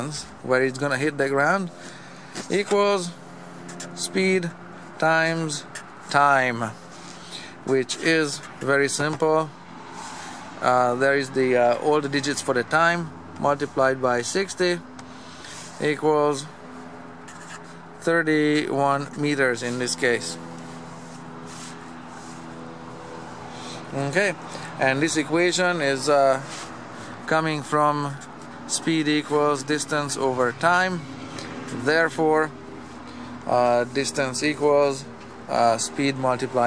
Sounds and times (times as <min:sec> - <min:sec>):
Speech: 0:00.0 - 0:01.7, 0:02.4 - 0:03.2, 0:04.0 - 0:06.8, 0:07.6 - 0:09.6, 0:10.6 - 0:14.9, 0:15.8 - 0:16.6, 0:18.0 - 0:20.4, 0:23.9 - 0:26.5, 0:27.3 - 0:31.0, 0:31.7 - 0:32.5, 0:33.5 - 0:36.6.